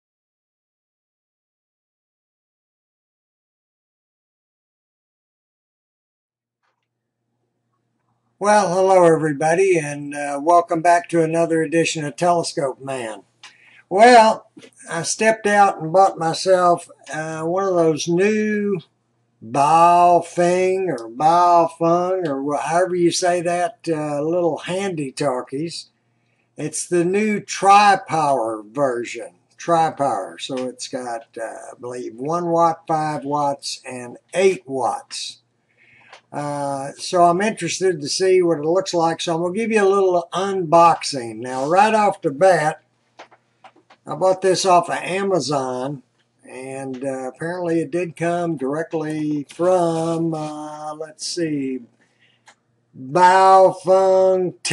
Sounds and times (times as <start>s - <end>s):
Speech: 8.4s - 13.3s, 13.9s - 25.9s, 26.6s - 35.4s, 36.3s - 42.8s, 44.0s - 51.9s, 53.0s - 54.7s.